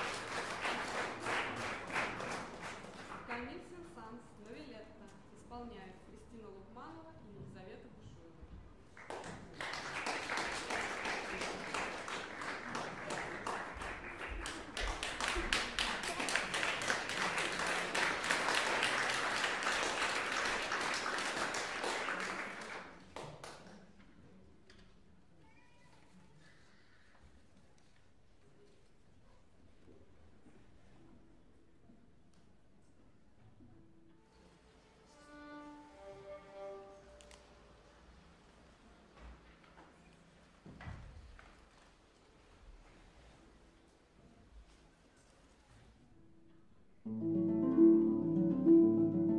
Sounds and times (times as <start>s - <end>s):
Violin, fiddle: 35.0s - 37.5s.